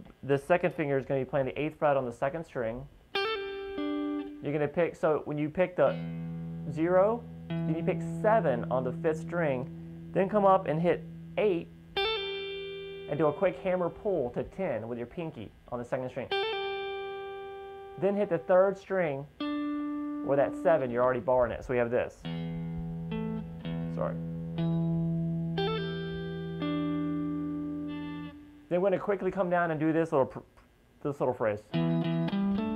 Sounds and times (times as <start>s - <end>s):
Guitar: 0.0s - 32.7s.